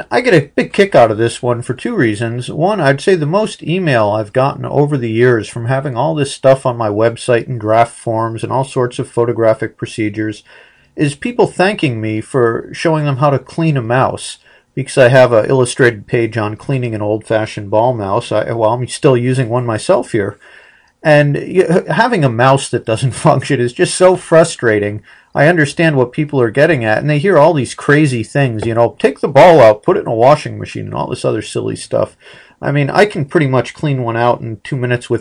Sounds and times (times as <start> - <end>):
Speech: 0.0 - 35.2.